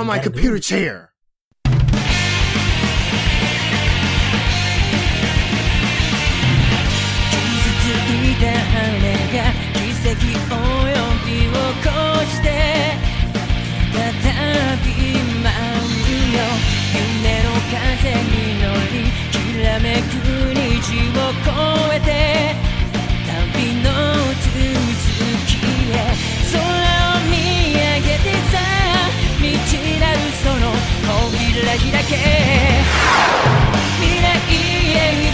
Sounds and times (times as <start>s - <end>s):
Music: 1.7s - 35.3s.